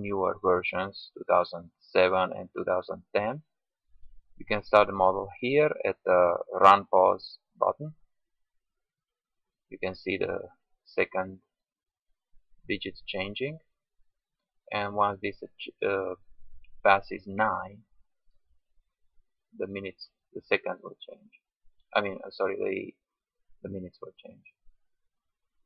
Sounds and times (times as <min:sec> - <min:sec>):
Speech: 0:00.0 - 0:03.5, 0:04.4 - 0:08.0, 0:09.8 - 0:11.5, 0:12.7 - 0:13.7, 0:14.7 - 0:16.2, 0:16.9 - 0:17.9, 0:19.6 - 0:21.4, 0:22.0 - 0:23.0, 0:23.6 - 0:24.6.